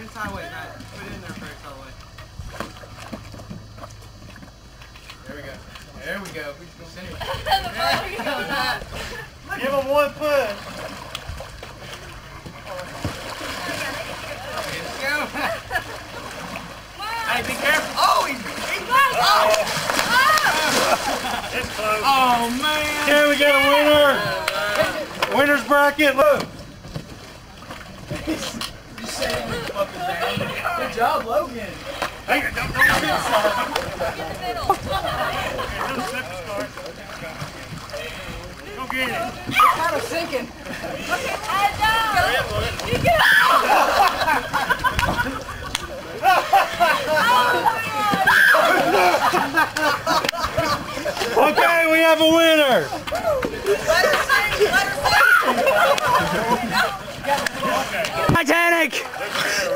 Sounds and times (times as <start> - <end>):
Boat, Water vehicle: 0.0 - 59.7.